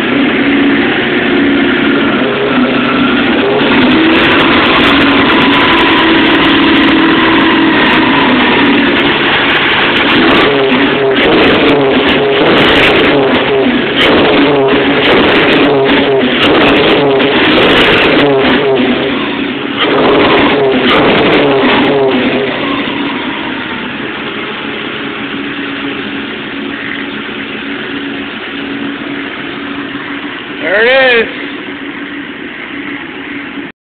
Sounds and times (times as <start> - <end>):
Vehicle: 0.0 - 33.8
Speech: 30.6 - 31.4.